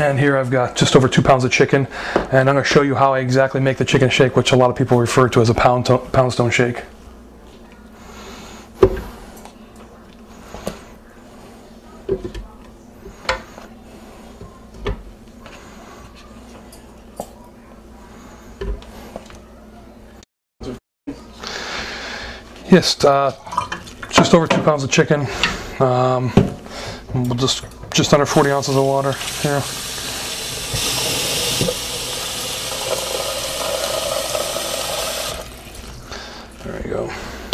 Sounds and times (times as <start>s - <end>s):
Speech: 0.0s - 6.9s, 22.6s - 23.5s, 24.1s - 26.4s, 27.1s - 29.7s, 36.6s - 37.3s.